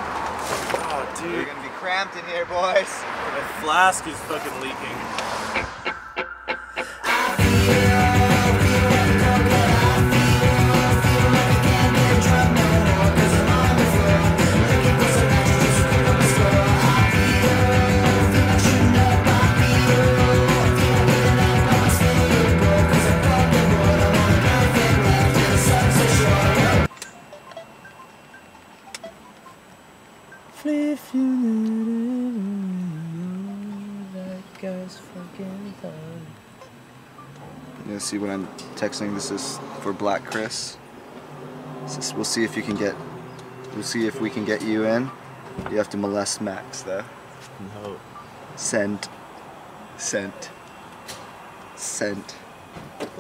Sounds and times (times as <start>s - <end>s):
Music: 6.8s - 29.4s.